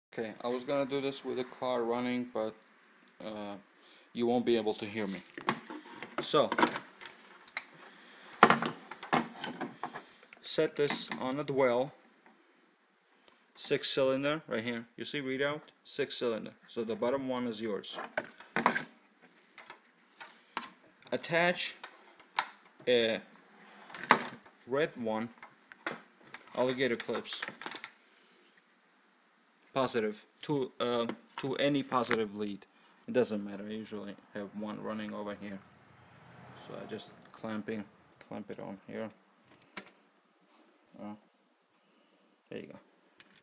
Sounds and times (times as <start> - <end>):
Speech: 0.1 - 2.6, 3.2 - 5.3, 6.2 - 6.7, 10.4 - 12.0, 13.6 - 18.1, 21.1 - 21.8, 22.8 - 23.3, 24.6 - 25.4, 26.5 - 27.5, 29.7 - 35.6, 36.6 - 39.2, 41.0 - 41.2, 42.5 - 42.9.